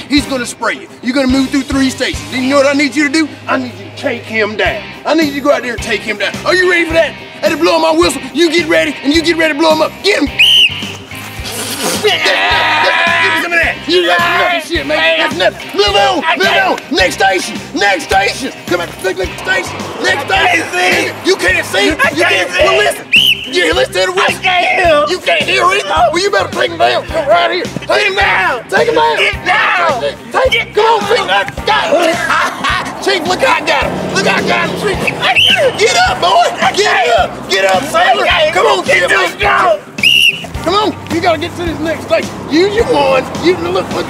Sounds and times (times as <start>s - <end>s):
Music: 0.0s - 44.1s
Speech: 12.0s - 39.8s, 40.6s - 44.1s.